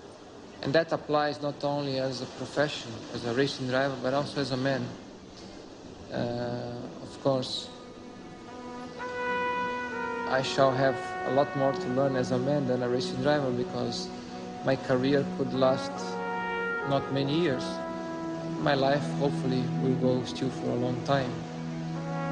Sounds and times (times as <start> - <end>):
Music: 0.0 - 22.3
Narration, monologue: 0.0 - 22.3
Male speech, man speaking: 0.6 - 5.0, 6.1 - 7.8, 10.3 - 14.1, 14.7 - 16.2, 16.8 - 17.8, 18.6 - 21.4.